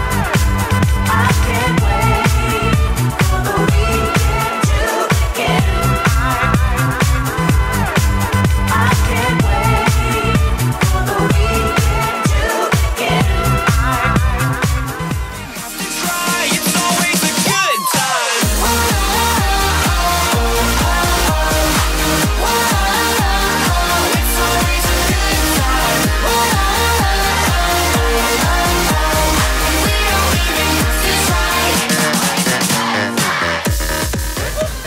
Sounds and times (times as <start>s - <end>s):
Disco: 0.0s - 34.8s.